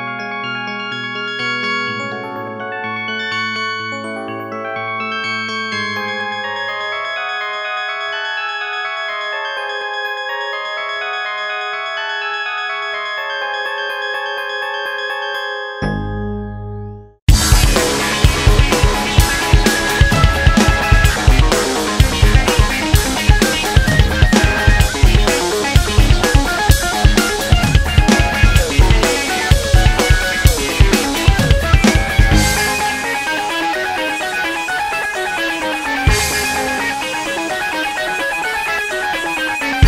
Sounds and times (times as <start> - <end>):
Music: 0.0 - 39.8.